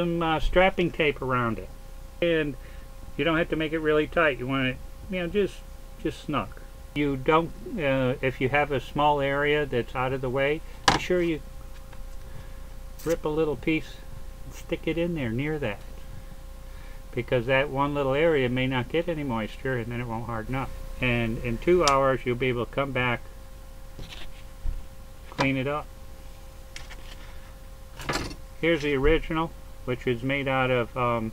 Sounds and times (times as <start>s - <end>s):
Speech: 0.0s - 2.6s, 3.2s - 11.4s, 13.0s - 15.9s, 17.1s - 23.2s, 25.3s - 25.9s, 28.6s - 31.3s.